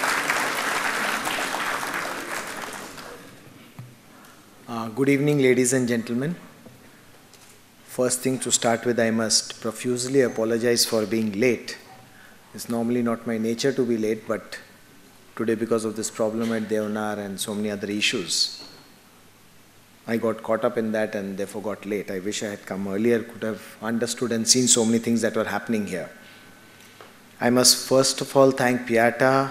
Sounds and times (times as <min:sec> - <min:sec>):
Male speech, man speaking: 0:04.7 - 0:06.4, 0:07.9 - 0:11.8, 0:12.6 - 0:14.7, 0:15.4 - 0:18.6, 0:20.1 - 0:26.1, 0:27.4 - 0:29.5.